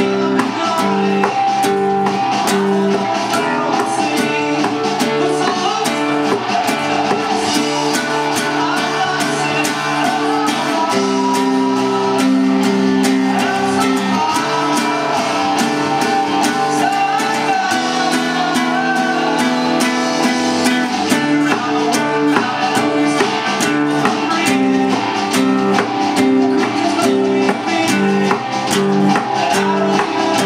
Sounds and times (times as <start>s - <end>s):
Acoustic guitar: 0.0s - 30.4s.